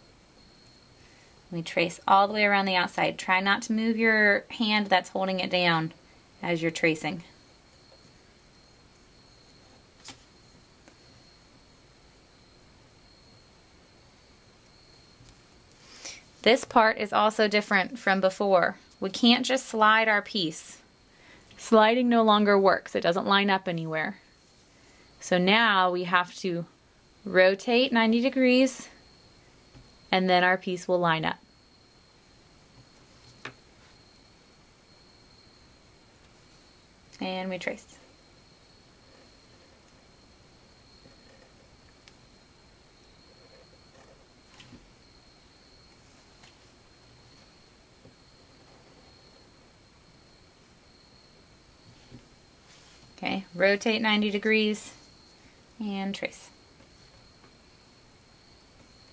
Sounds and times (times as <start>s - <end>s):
Inside, small room: 0.0s - 59.1s
Speech: 1.6s - 7.3s, 16.5s - 20.8s, 21.6s - 24.2s, 25.2s - 26.7s, 27.3s - 28.9s, 30.2s - 31.4s, 37.2s - 38.0s, 53.2s - 55.0s, 55.8s - 56.5s.